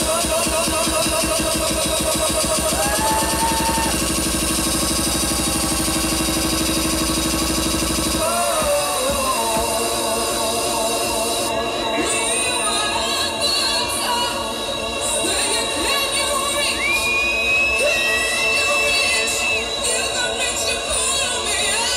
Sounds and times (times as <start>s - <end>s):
House music: 0.0s - 21.9s.